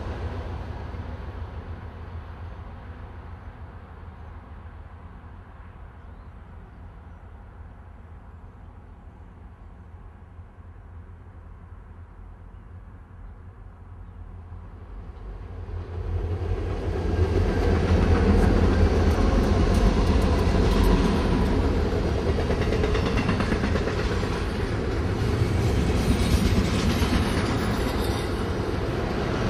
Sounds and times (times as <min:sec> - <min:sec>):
Outside, urban or manmade: 0:00.0 - 0:29.4
Train: 0:00.0 - 0:29.4.